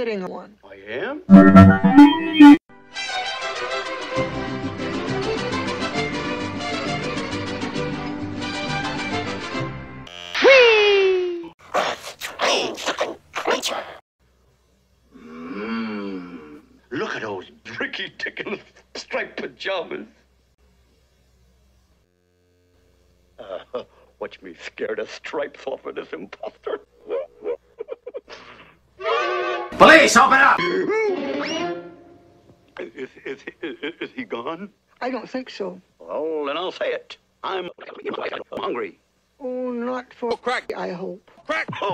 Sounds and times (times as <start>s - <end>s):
Music: 1.3s - 10.1s, 29.0s - 29.8s, 30.6s - 32.4s.